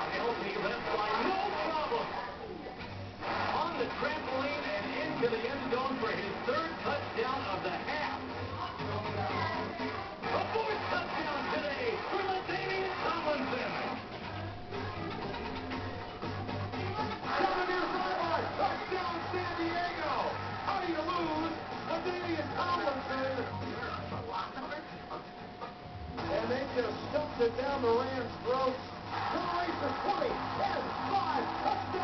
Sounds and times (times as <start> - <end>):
Music: 0.0 - 32.0
Speech: 3.5 - 14.0, 26.2 - 32.0.